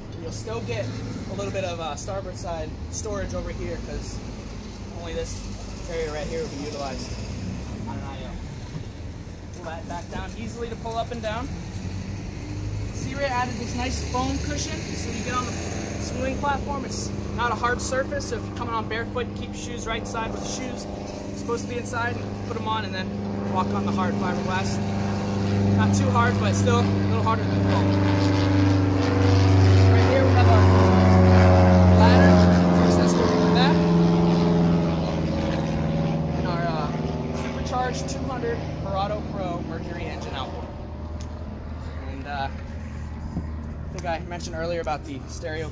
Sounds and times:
Propeller, airscrew: 0.0s - 45.7s.

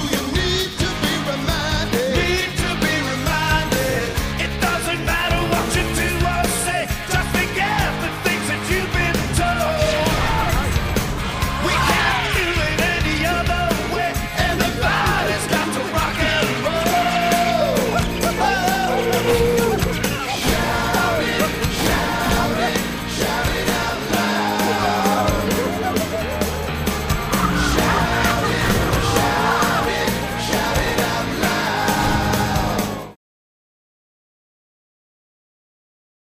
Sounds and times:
Music: 0.0s - 33.2s.

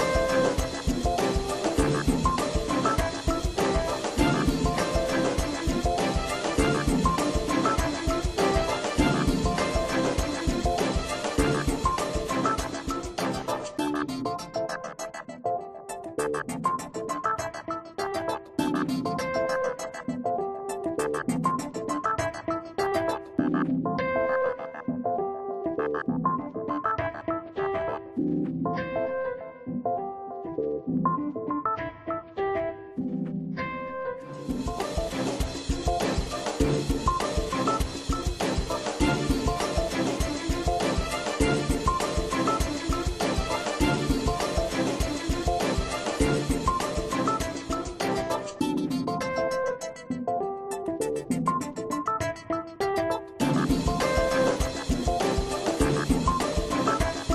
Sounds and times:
Music: 0.0s - 57.3s.

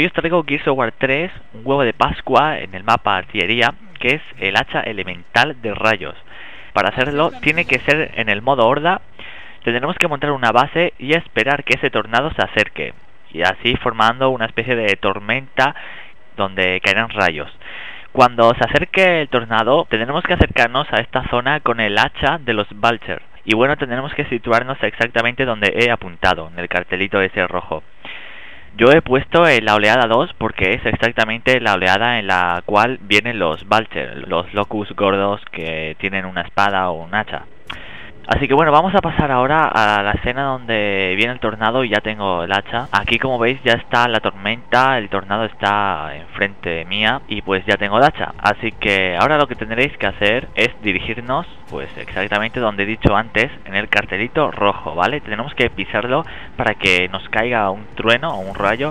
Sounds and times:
Speech: 0.0s - 15.8s, 16.4s - 27.9s, 28.7s - 37.5s, 38.2s - 58.9s.

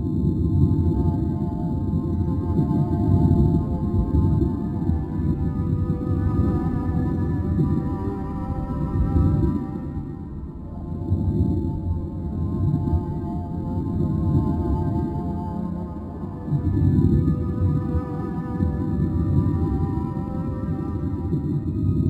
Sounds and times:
Music: 0.0s - 22.1s.

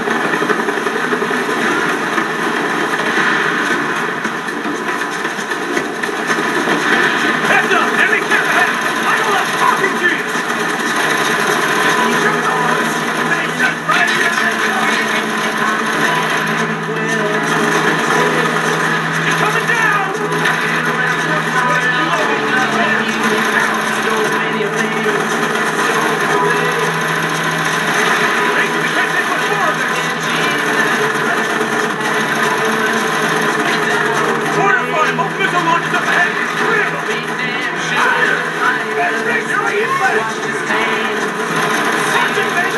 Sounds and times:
Music: 0.0s - 42.7s
Speech: 7.4s - 10.4s, 11.6s - 27.0s, 28.1s - 33.0s, 33.6s - 41.4s, 42.0s - 42.7s.

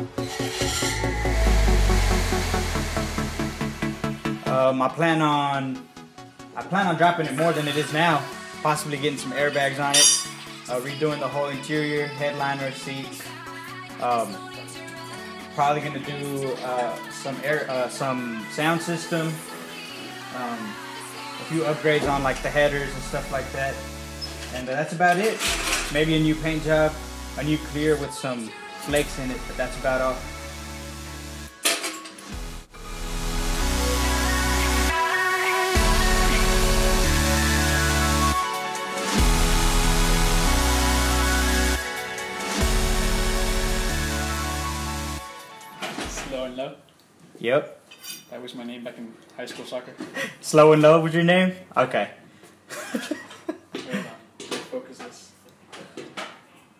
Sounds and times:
Music: 0.0s - 46.7s
Speech: 4.5s - 5.8s, 6.6s - 10.0s, 14.0s - 14.4s, 15.6s - 19.4s, 21.5s - 23.8s, 24.6s - 30.2s, 47.4s - 52.2s, 53.8s - 55.3s.

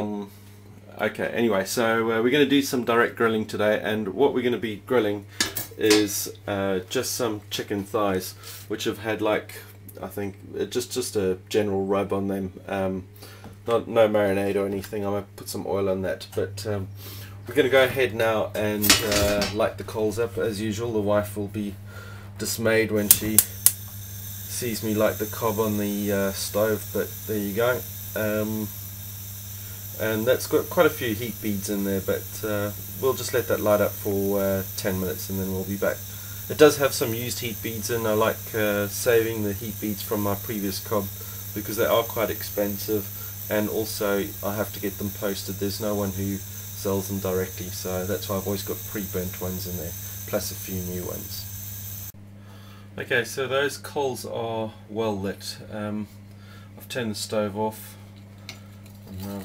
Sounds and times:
Speech: 0.0s - 21.8s, 22.4s - 23.5s, 24.5s - 28.7s, 30.0s - 51.5s, 53.0s - 56.2s, 56.8s - 58.0s, 59.1s - 59.4s.

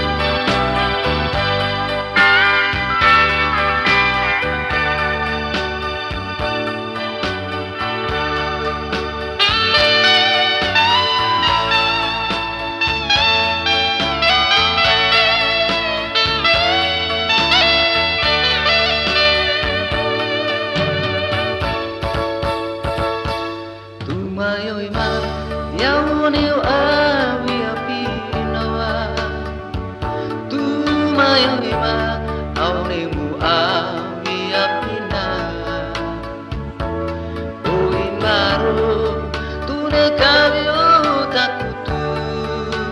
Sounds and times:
Middle Eastern music: 0.0s - 42.9s.

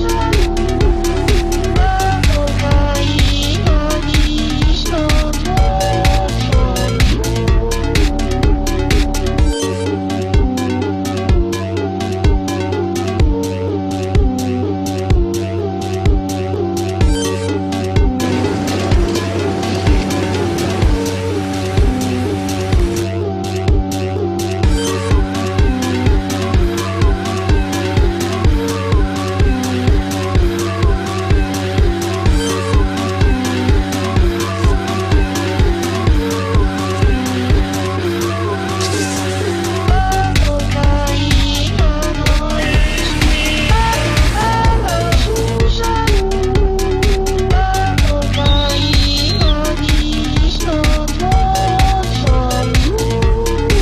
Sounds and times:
Electronica: 0.0s - 53.8s.

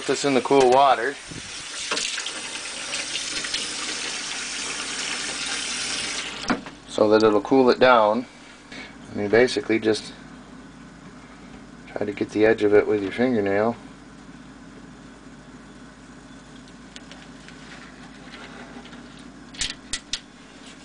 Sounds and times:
Speech: 0.0s - 1.2s, 6.9s - 8.3s, 9.1s - 10.2s, 11.9s - 13.8s
Water tap, faucet: 0.0s - 6.5s.

